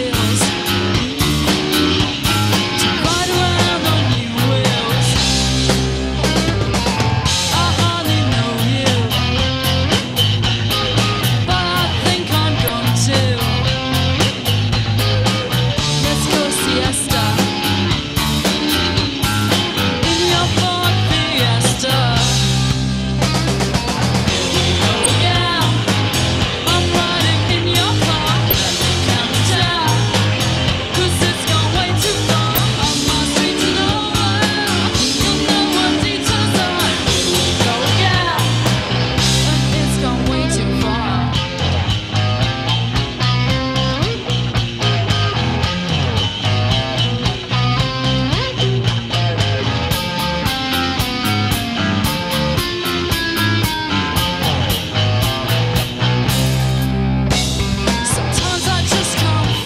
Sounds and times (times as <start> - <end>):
Music: 0.0 - 59.6.